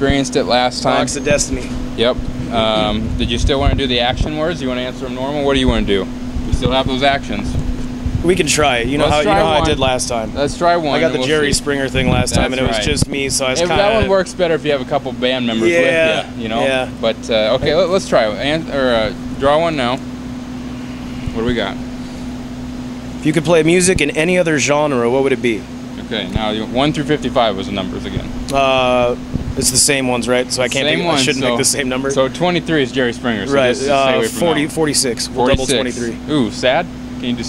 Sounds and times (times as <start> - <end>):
Speech: 0.0 - 7.6, 8.2 - 20.0, 21.4 - 21.8, 23.2 - 37.4
Outside, urban or manmade: 0.0 - 37.4.